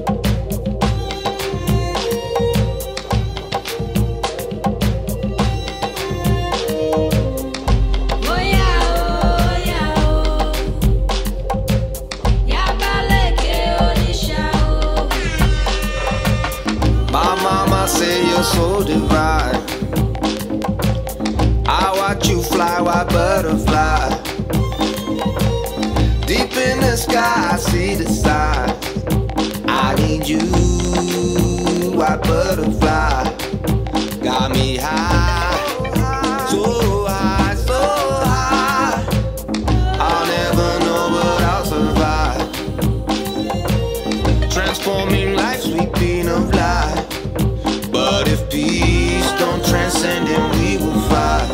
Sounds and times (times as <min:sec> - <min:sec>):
Violin, fiddle: 0:00.8 - 0:09.3, 0:24.5 - 0:27.5, 0:43.0 - 0:45.5.